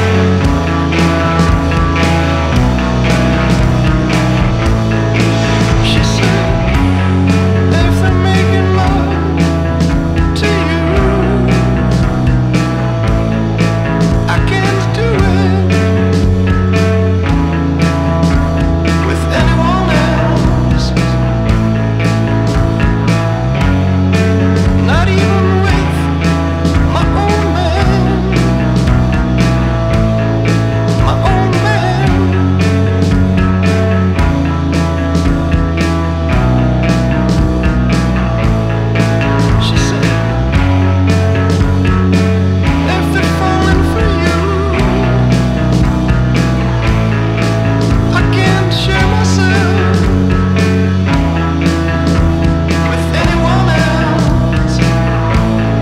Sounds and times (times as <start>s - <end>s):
Pop music: 0.0s - 55.8s.